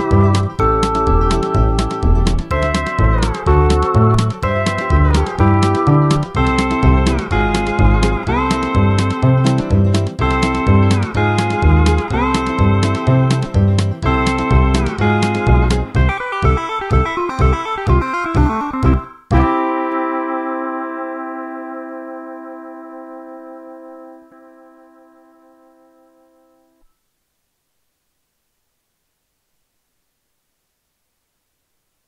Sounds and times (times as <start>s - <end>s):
Steel guitar, slide guitar: 0.0s - 26.7s
Electronic tuner: 0.0s - 27.1s.